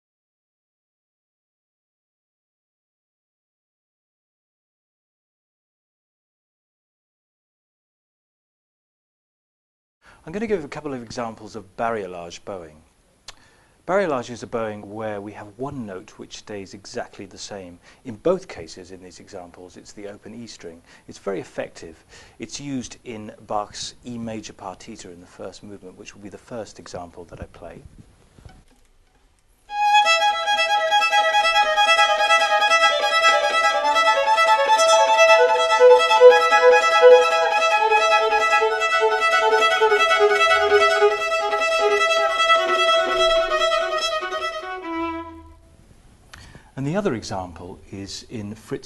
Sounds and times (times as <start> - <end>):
Speech: 10.2 - 12.9, 13.9 - 27.9, 46.8 - 48.8
Violin, fiddle: 29.7 - 45.6.